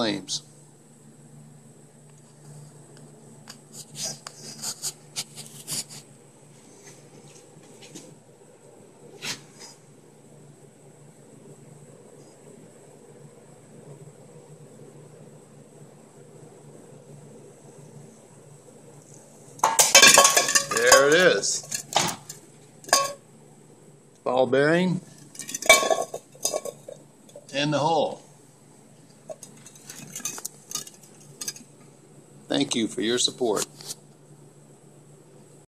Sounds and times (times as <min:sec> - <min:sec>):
Speech: 0:00.0 - 0:00.5, 0:20.7 - 0:21.7, 0:24.2 - 0:25.0, 0:27.5 - 0:28.2, 0:32.5 - 0:33.7
Inside, small room: 0:00.0 - 0:35.6.